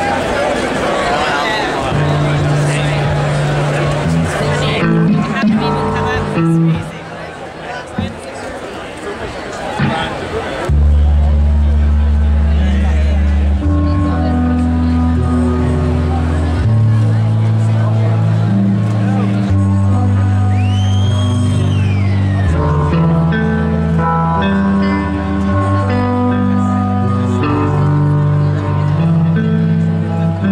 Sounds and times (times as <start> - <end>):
Speech: 0.0 - 20.5
Crowd: 0.0 - 30.5
Hubbub, speech noise, speech babble: 0.0 - 30.5
Music: 1.8 - 7.0, 10.7 - 30.5.